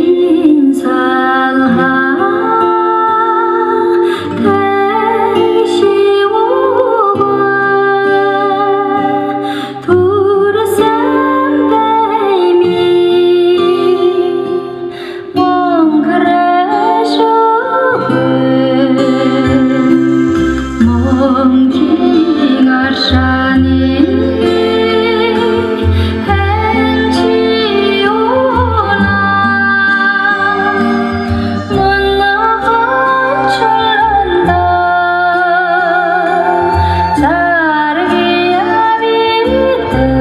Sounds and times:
Music: 0.0s - 40.2s.

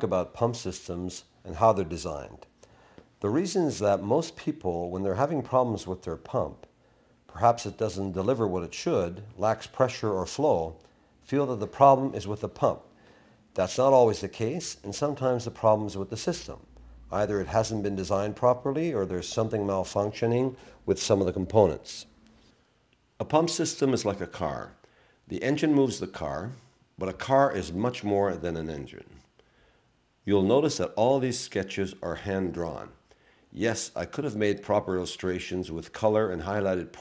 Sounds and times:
Speech: 0.0s - 2.6s, 3.2s - 6.7s, 7.3s - 12.9s, 13.5s - 22.2s, 23.2s - 29.3s, 30.2s - 37.0s.

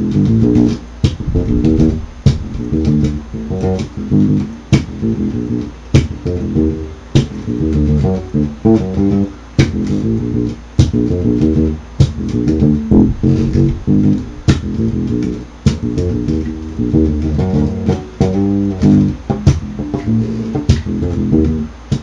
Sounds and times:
Music: 0.0s - 22.0s
Harmonic: 1.2s - 3.4s, 12.8s - 15.2s.

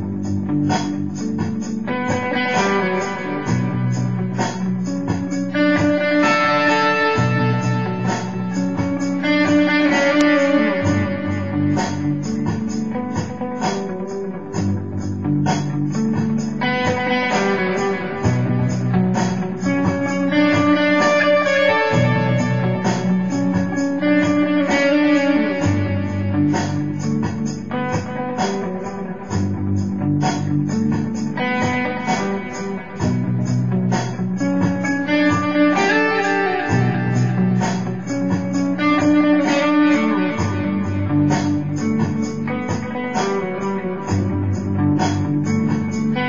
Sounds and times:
Electric guitar: 0.0s - 46.2s.

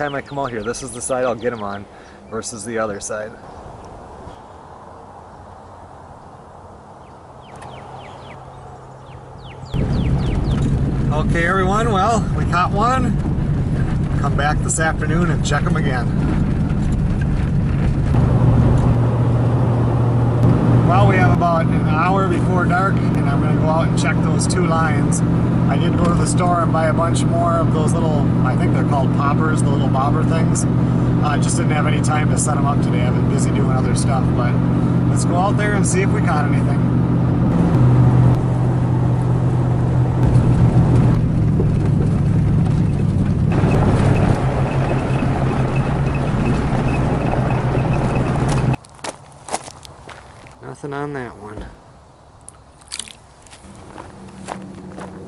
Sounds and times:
Outside, rural or natural: 0.0s - 55.2s.

